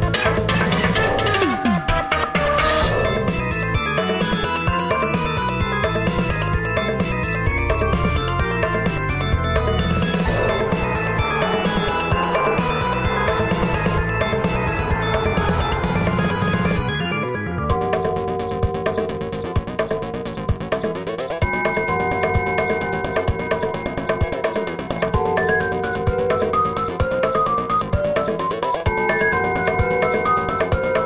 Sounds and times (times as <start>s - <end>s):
Music: 0.0s - 31.0s.